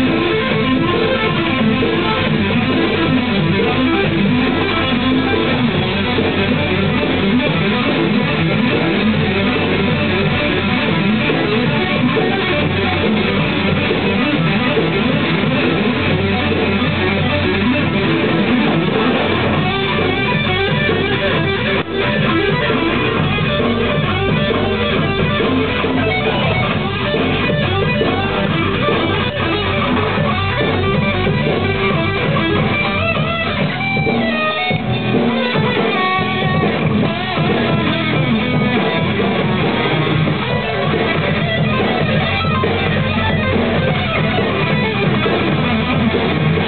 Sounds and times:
Guitar: 0.0 - 46.6.

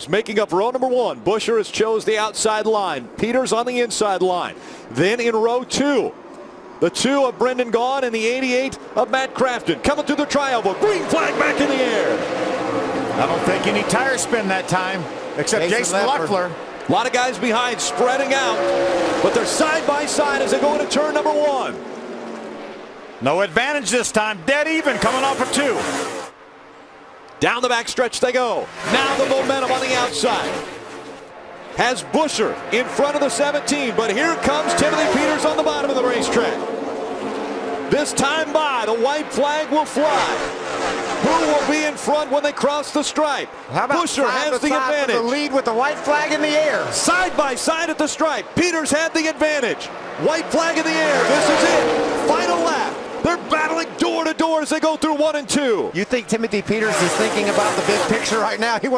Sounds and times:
Speech: 0.0 - 6.1, 6.8 - 12.2, 13.2 - 18.6, 19.2 - 21.8, 23.2 - 25.9, 27.4 - 30.6, 31.8 - 36.6, 37.9 - 40.5, 41.2 - 58.9
Car: 0.0 - 58.9.

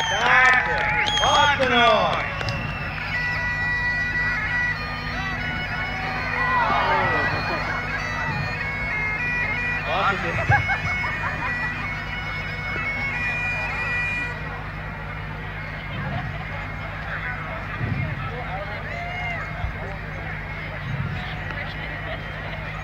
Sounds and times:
Music: 0.0 - 22.8
Speech: 15.7 - 22.8.

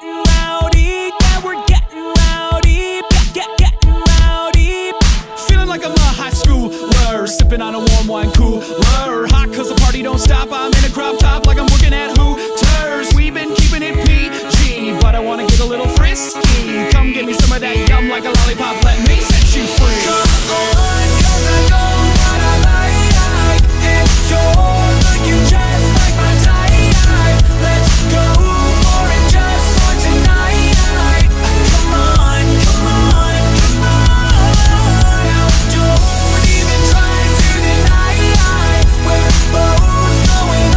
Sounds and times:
Music: 0.0 - 40.7.

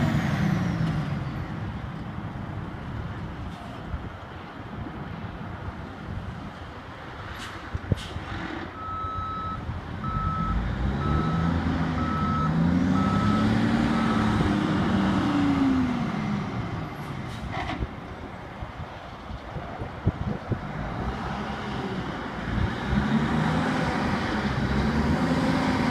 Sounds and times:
Reversing beeps: 8.8 - 14.4.

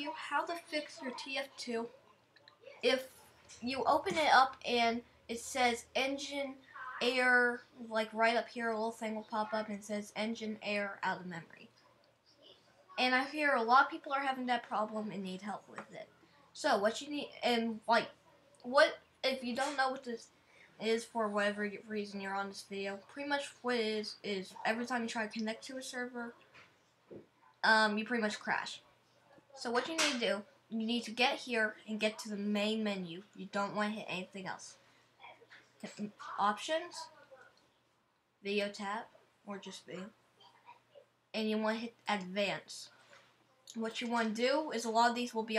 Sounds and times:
Speech: 0.0 - 1.9, 2.7 - 11.7, 13.0 - 26.4, 27.6 - 28.8, 29.4 - 34.8, 35.8 - 37.4, 38.4 - 40.1, 41.4 - 42.9, 43.7 - 45.5.

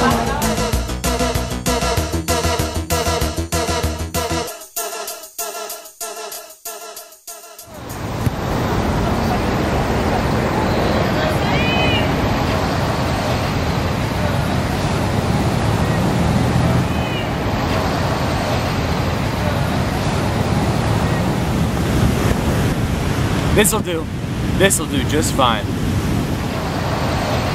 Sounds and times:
Waves, surf: 7.7 - 27.5
Wind noise (microphone): 20.4 - 27.5.

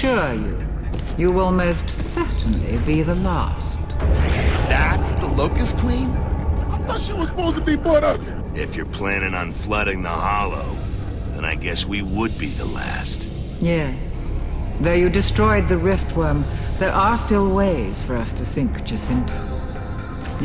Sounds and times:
Speech: 1.2 - 3.8, 4.5 - 6.1, 6.8 - 10.8, 11.4 - 14.0, 14.8 - 19.3.

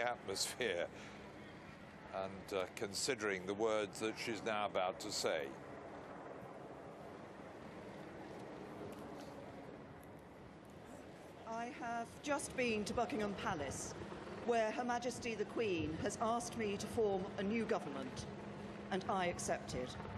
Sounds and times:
Narration, monologue: 0.0 - 10.0, 10.8 - 20.1
Female speech, woman speaking: 11.5 - 18.3, 18.9 - 20.1.

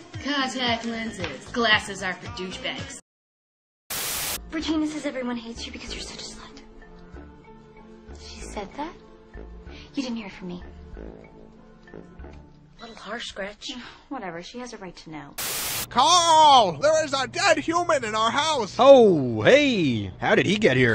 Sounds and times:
Music: 0.0 - 3.0, 4.4 - 13.8, 15.9 - 20.9.

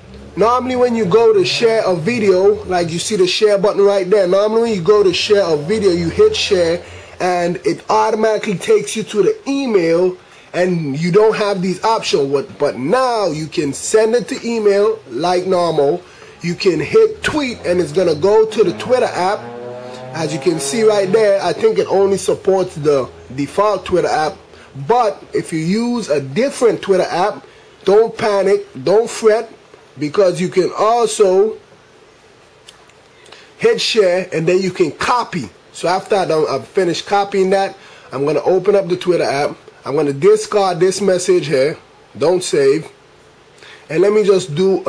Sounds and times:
Speech: 0.4 - 19.4, 20.1 - 31.6, 33.6 - 43.0, 43.9 - 44.8.

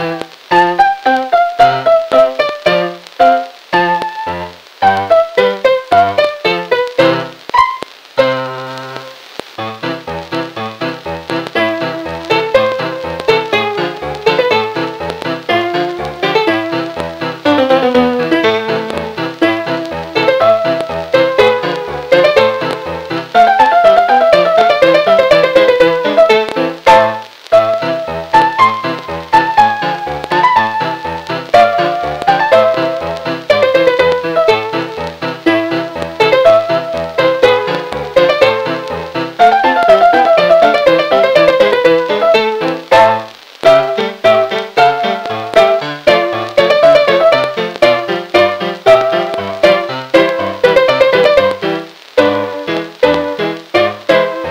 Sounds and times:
Keyboard (musical): 0.0 - 54.5.

